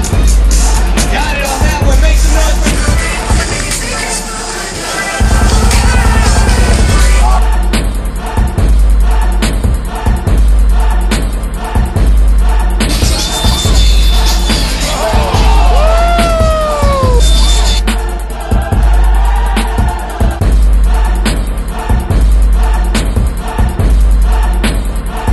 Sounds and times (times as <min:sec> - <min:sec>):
Music: 0:00.0 - 0:25.3.